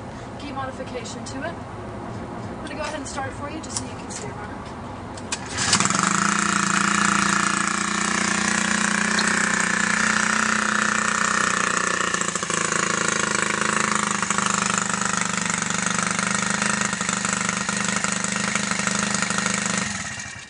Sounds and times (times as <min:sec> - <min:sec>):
Vehicle: 0:00.0 - 0:20.4.